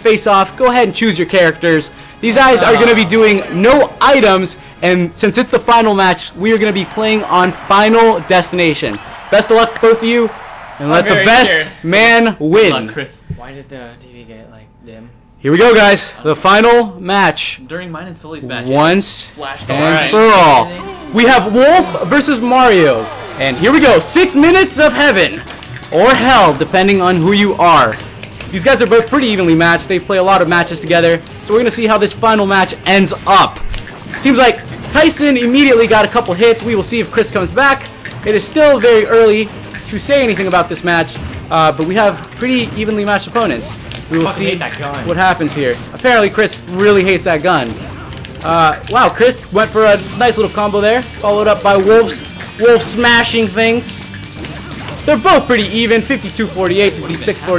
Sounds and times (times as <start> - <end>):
Speech: 0.0 - 25.4, 34.2 - 47.8, 48.4 - 54.0, 55.1 - 57.5.